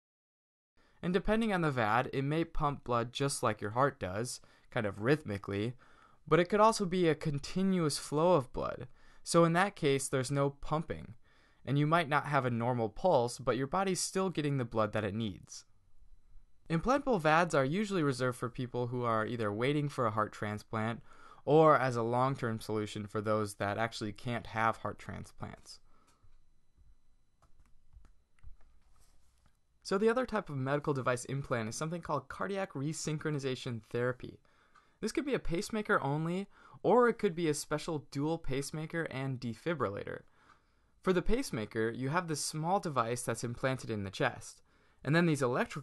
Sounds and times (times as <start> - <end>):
Speech: 1.0 - 15.7, 16.7 - 25.8, 29.8 - 34.4, 35.0 - 40.3, 41.0 - 45.8.